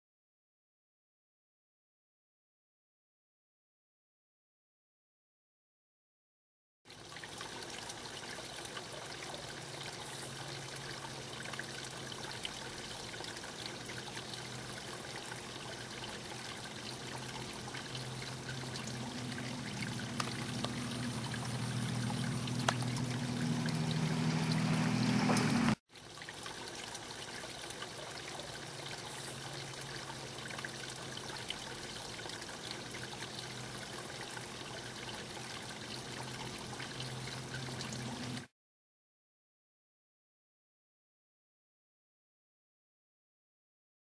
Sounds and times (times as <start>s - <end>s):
Pour: 6.9s - 38.5s.